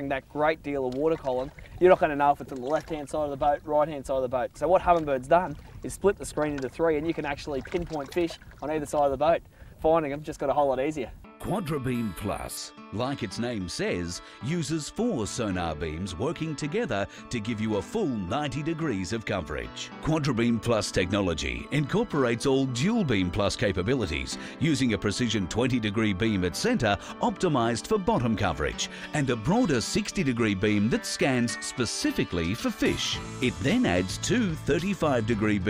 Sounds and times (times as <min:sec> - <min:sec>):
Speech: 0:00.0 - 0:35.6
Music: 0:10.5 - 0:35.6.